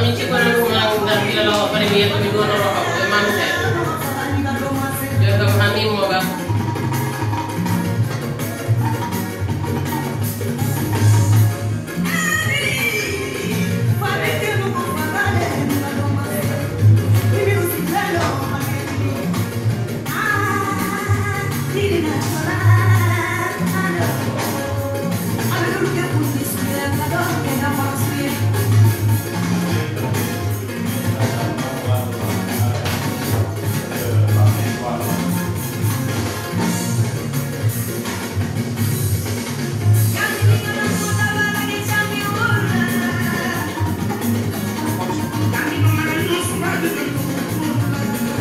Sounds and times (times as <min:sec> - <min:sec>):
Speech: 0:00.0 - 0:06.4, 0:30.8 - 0:35.4
Music: 0:00.0 - 0:48.4.